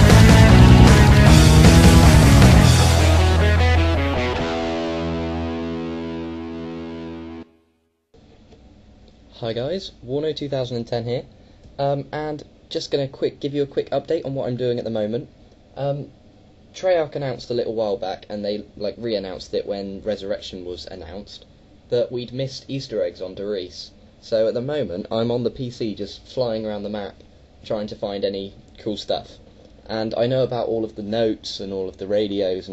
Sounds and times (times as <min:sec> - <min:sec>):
Speech: 0:09.3 - 0:16.2, 0:16.8 - 0:32.7.